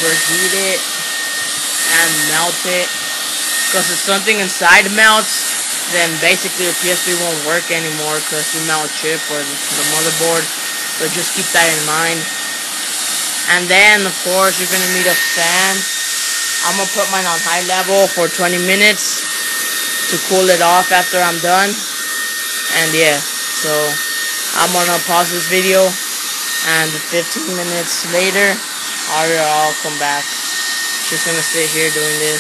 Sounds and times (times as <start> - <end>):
Hair dryer: 0.0 - 32.4.